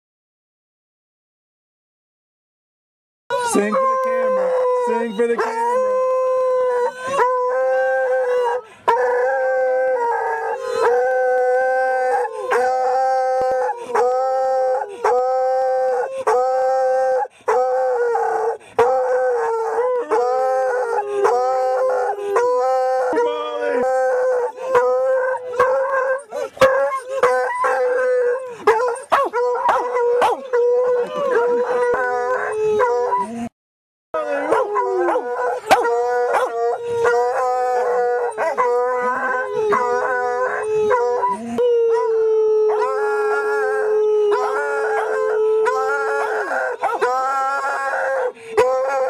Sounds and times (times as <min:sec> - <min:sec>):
Howl: 0:03.3 - 0:33.5, 0:34.2 - 0:49.1
Outside, rural or natural: 0:03.3 - 0:33.6, 0:34.2 - 0:49.1
Speech: 0:03.4 - 0:06.2, 0:20.1 - 0:25.8.